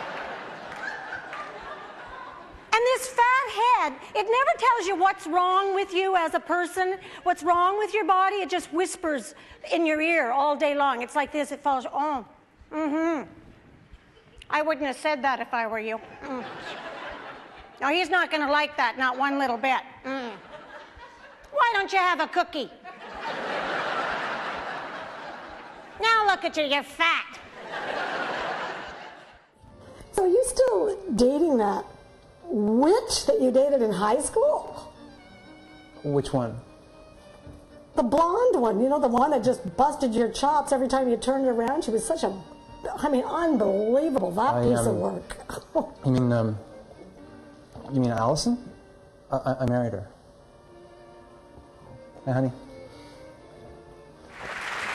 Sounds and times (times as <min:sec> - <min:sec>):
Conversation: 0:00.6 - 0:54.8.